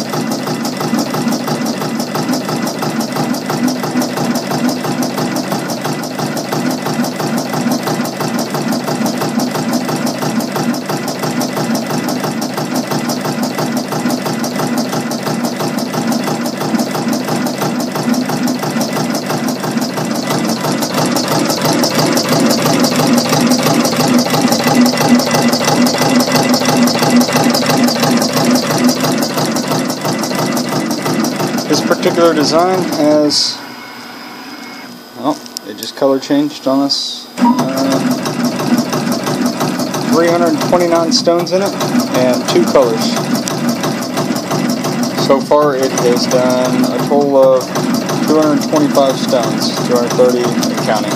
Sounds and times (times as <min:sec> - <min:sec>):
Speech: 0:31.7 - 0:33.6, 0:35.2 - 0:38.1, 0:40.1 - 0:43.2, 0:45.2 - 0:47.7, 0:48.3 - 0:51.1.